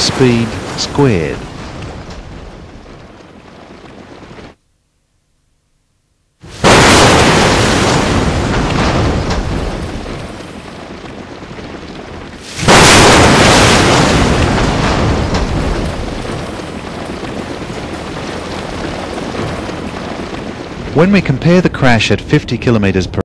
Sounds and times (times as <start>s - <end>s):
Speech: 0.0s - 1.4s, 21.0s - 23.2s.